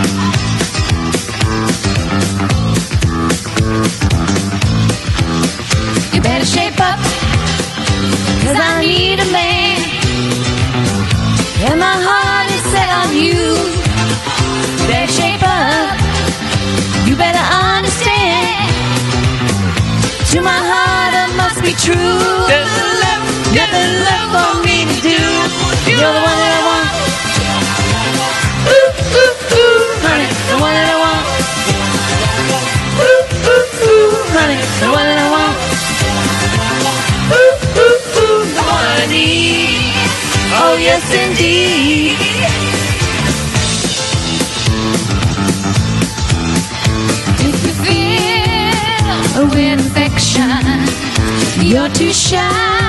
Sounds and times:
Music: 0.0 - 52.8
Inside, large room or hall: 11.3 - 52.8
Singing: 20.3 - 42.5.

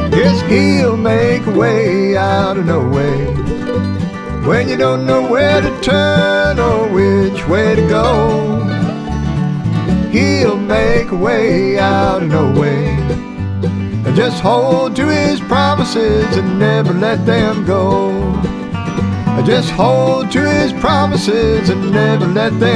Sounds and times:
Bluegrass: 0.0 - 22.7.

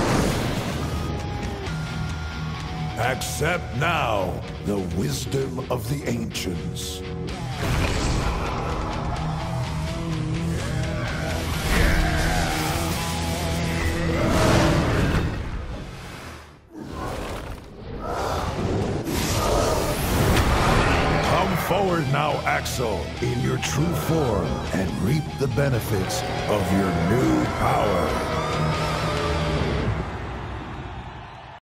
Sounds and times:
Speech: 3.0 - 7.0, 21.2 - 28.3
Bass guitar: 6.6 - 14.7, 21.2 - 29.9.

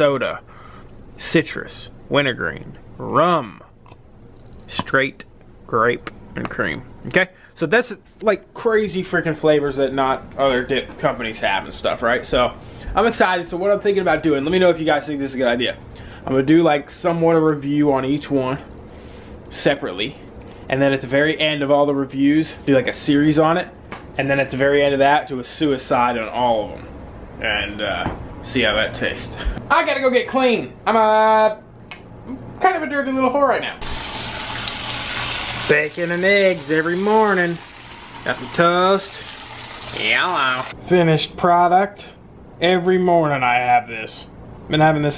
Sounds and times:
Inside, small room: 0.0 - 45.1
Speech: 1.2 - 3.7, 4.7 - 18.7, 19.5 - 31.6, 35.7 - 37.6, 38.3 - 39.2, 39.9 - 45.1.

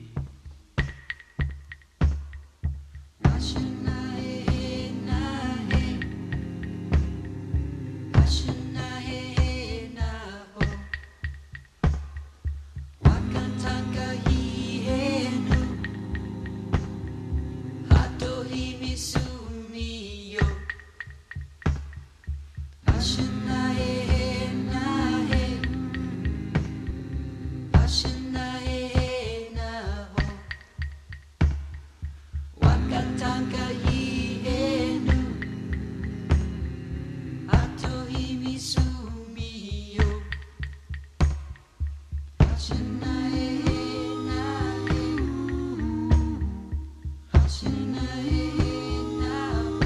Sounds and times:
Music: 0.0 - 49.8
Singing: 3.2 - 11.1, 13.0 - 20.9, 22.8 - 30.7, 32.6 - 40.6, 42.4 - 49.8.

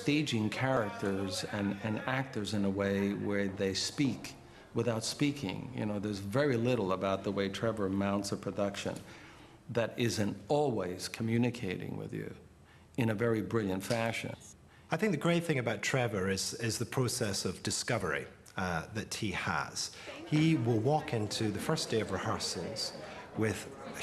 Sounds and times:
Speech: 0.0 - 9.1, 9.7 - 12.4, 13.0 - 24.0.

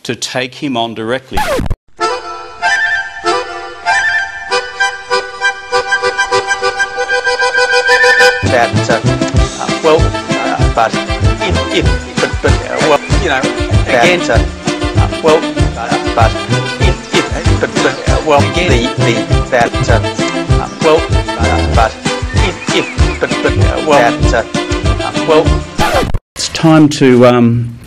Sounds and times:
Speech: 0.0 - 1.4, 8.4 - 14.4, 15.0 - 20.0, 20.6 - 21.9, 23.2 - 25.5, 26.4 - 27.8
Music: 2.0 - 26.1.

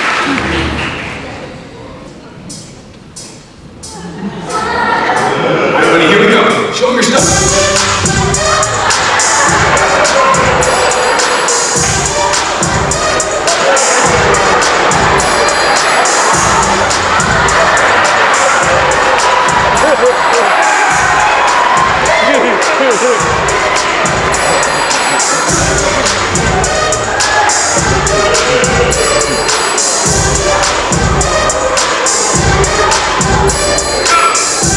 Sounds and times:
Music: 2.4 - 34.7.

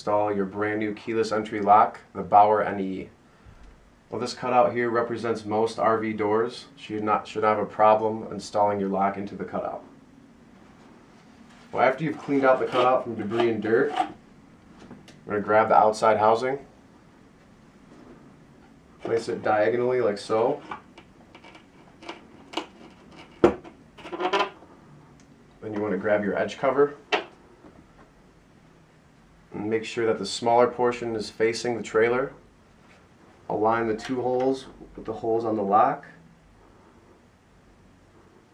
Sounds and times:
Speech: 0.0 - 3.2, 4.1 - 9.9, 11.7 - 14.2, 15.2 - 16.7, 19.0 - 20.6, 25.6 - 27.0, 29.5 - 32.4, 33.5 - 36.2.

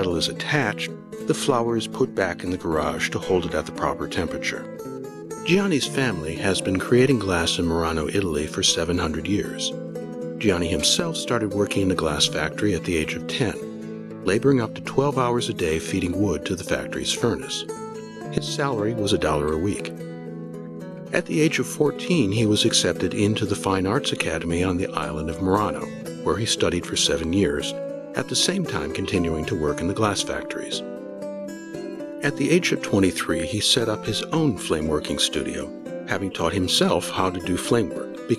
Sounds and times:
Speech: 0.0 - 4.8, 5.5 - 9.7, 10.4 - 13.6, 14.3 - 17.7, 18.3 - 19.9, 21.2 - 30.9, 32.2 - 38.3
Music: 0.0 - 38.3.

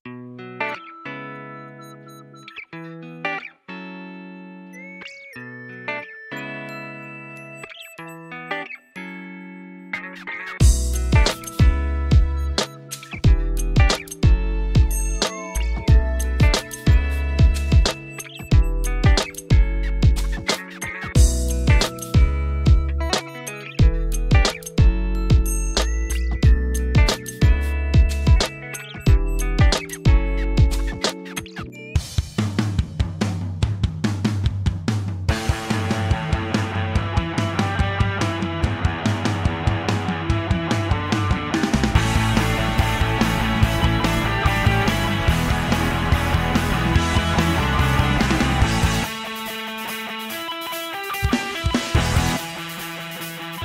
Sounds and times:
Music: 0.1 - 53.6.

